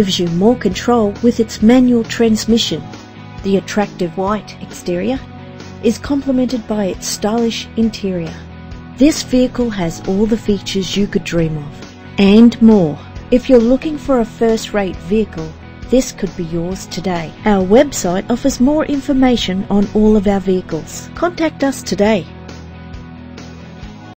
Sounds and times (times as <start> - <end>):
Speech: 0.0 - 5.2, 5.9 - 8.4, 9.0 - 22.3
Music: 0.0 - 24.1.